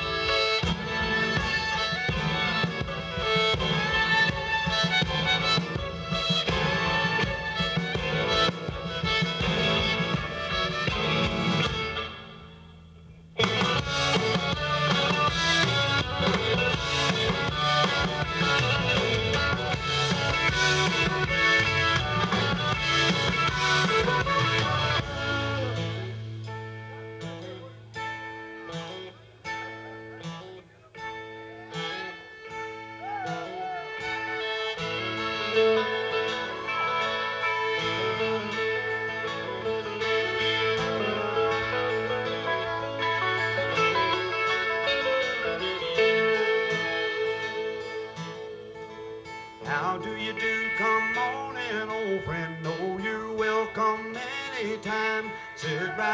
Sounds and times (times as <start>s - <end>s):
Music: 0.0s - 56.1s.